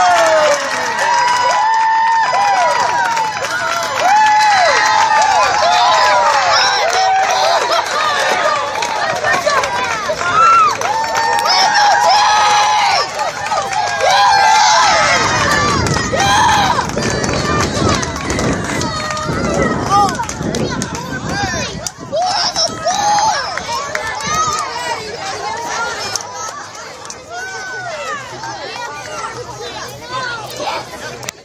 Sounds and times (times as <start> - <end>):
Speech: 16.0 - 31.4.